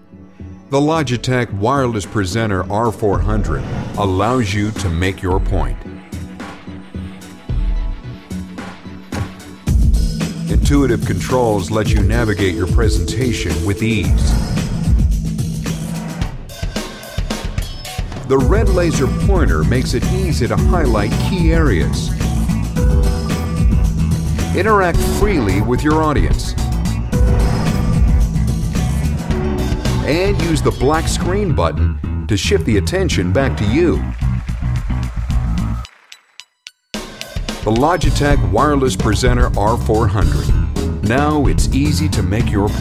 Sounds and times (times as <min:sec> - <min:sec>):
Music: 0:00.0 - 0:42.8
Speech: 0:00.7 - 0:05.9, 0:10.5 - 0:14.4, 0:18.3 - 0:22.1, 0:24.5 - 0:26.6, 0:30.0 - 0:34.1, 0:37.6 - 0:42.8.